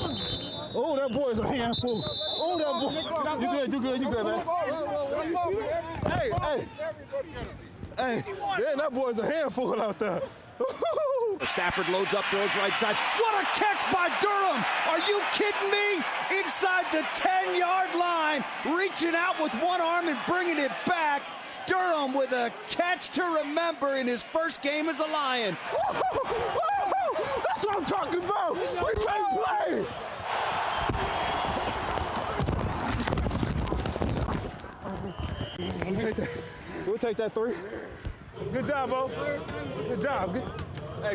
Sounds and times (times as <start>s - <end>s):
Speech: 11.4s - 25.6s.